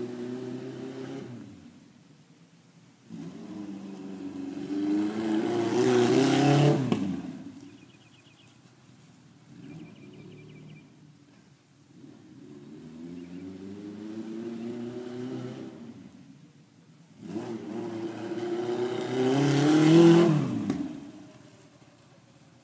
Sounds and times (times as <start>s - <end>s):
Car passing by: 3.1s - 7.7s, 12.0s - 16.2s, 17.2s - 22.2s.